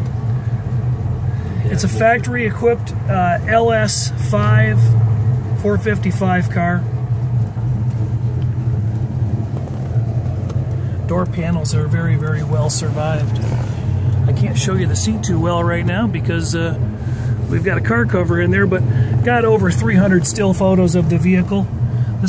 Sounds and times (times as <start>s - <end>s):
Car: 0.0s - 22.2s
Speech: 1.6s - 4.9s, 5.6s - 6.9s, 11.1s - 13.4s, 14.3s - 16.8s, 17.5s - 22.2s.